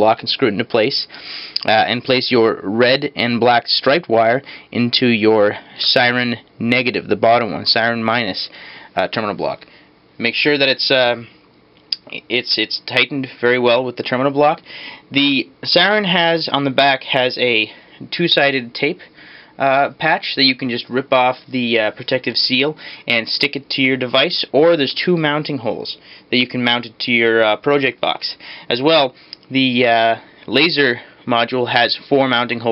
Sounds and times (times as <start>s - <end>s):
Speech: 0.0s - 11.3s, 12.0s - 32.7s.